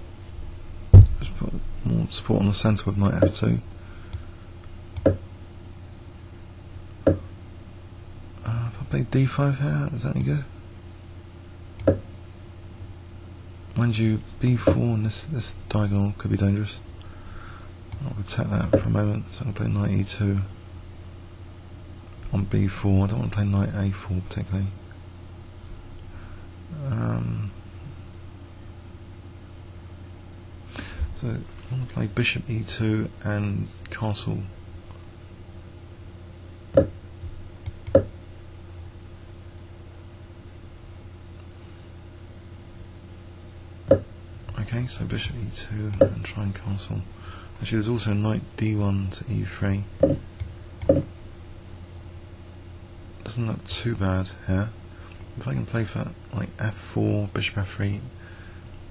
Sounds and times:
Speech: 1.2 - 3.7, 8.4 - 10.6, 13.8 - 16.8, 18.0 - 20.6, 22.2 - 24.8, 26.7 - 27.6, 31.1 - 34.5, 44.5 - 49.9, 53.2 - 54.8, 55.4 - 58.2.

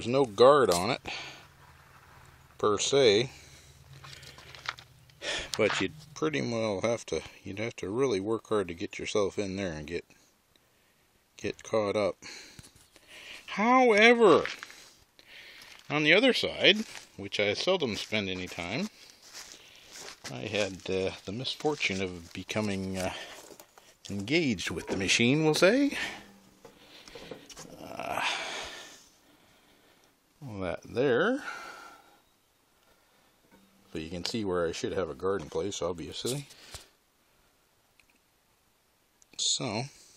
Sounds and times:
Speech: 0.0 - 1.1, 2.6 - 3.4, 5.6 - 10.1, 11.4 - 12.2, 13.5 - 14.6, 15.9 - 18.9, 20.3 - 23.3, 24.1 - 26.2, 30.4 - 31.5, 33.9 - 36.5, 39.4 - 40.0.

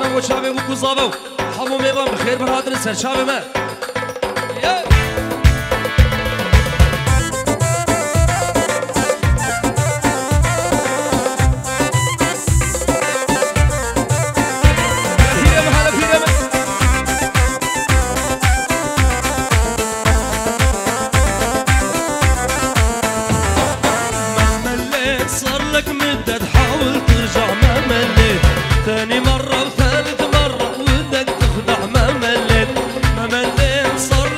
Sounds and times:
Music: 0.0 - 34.3.

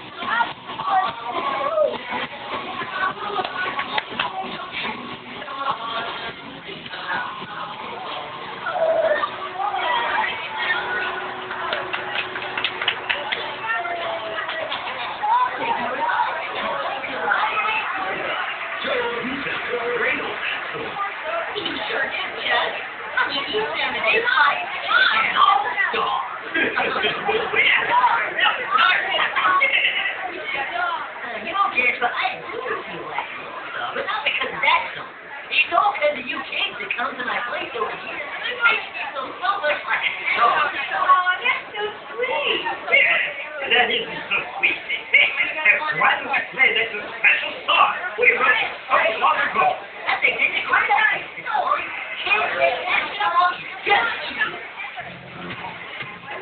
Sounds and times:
Speech: 0.0 - 56.4.

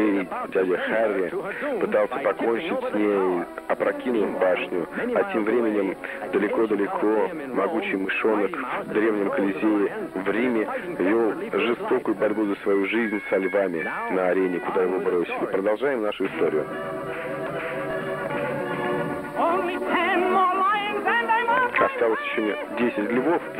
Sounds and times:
Speech: 0.0 - 16.6, 21.7 - 23.5
Music: 0.0 - 23.5.

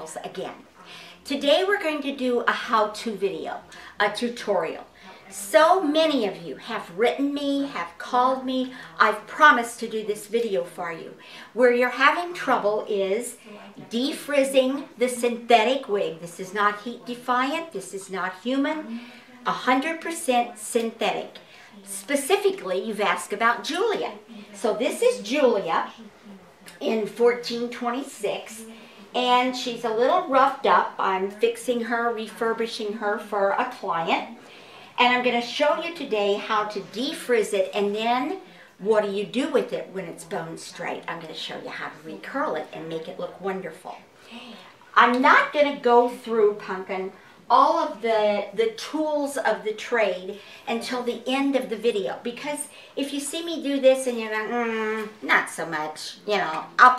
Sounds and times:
Speech: 0.0 - 34.4, 35.0 - 56.9.

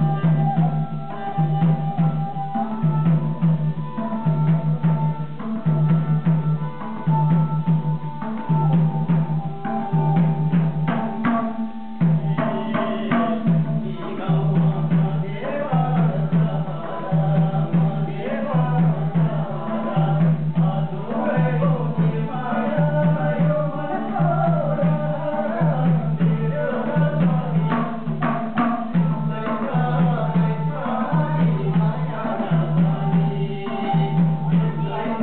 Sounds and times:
Traditional music: 0.0 - 35.2.

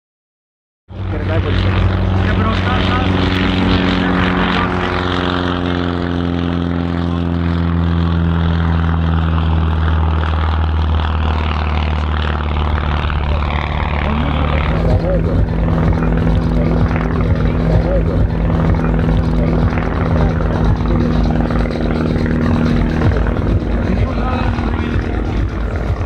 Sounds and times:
Propeller, airscrew: 0.9 - 26.0.

